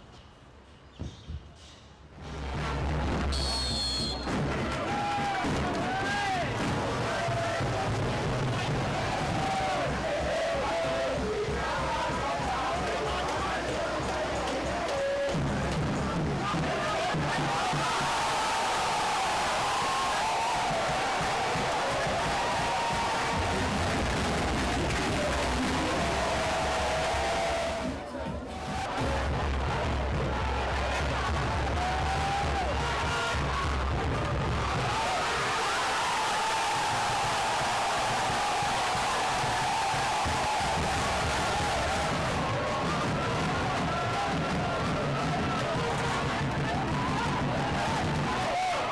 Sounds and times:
Music: 2.1s - 48.9s
Speech: 11.2s - 17.5s.

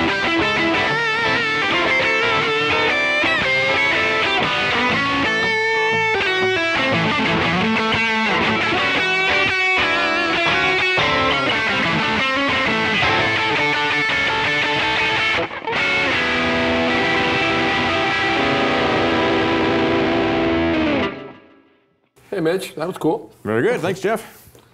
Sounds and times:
Electric guitar: 0.0s - 22.1s.

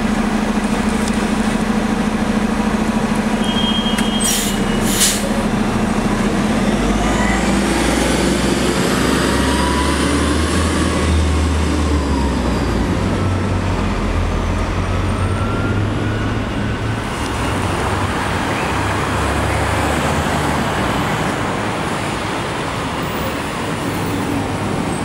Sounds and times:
Bus: 0.0s - 25.0s.

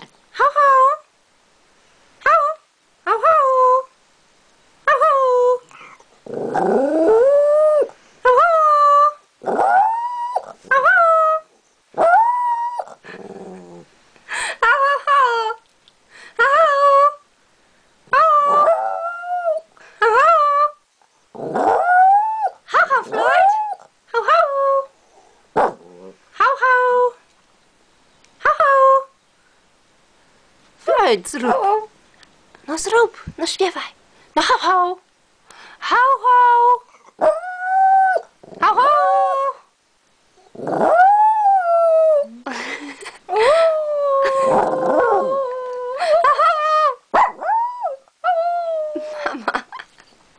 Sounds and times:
Speech: 0.3s - 1.1s, 2.2s - 3.9s, 4.9s - 5.7s, 22.7s - 24.9s, 26.4s - 27.2s, 28.4s - 29.1s, 30.8s - 31.9s, 32.6s - 35.1s, 35.8s - 36.9s, 38.6s - 39.6s.

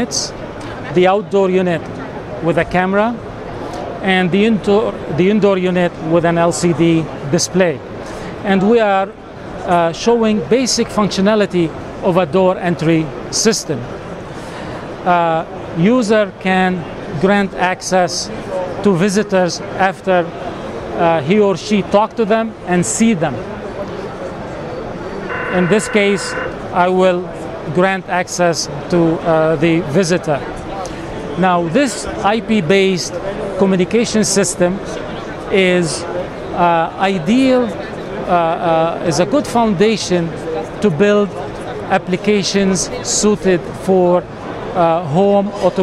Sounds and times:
Speech: 0.0s - 3.2s, 4.0s - 7.8s, 8.4s - 13.9s, 15.0s - 20.4s, 21.0s - 24.4s, 25.5s - 45.8s.

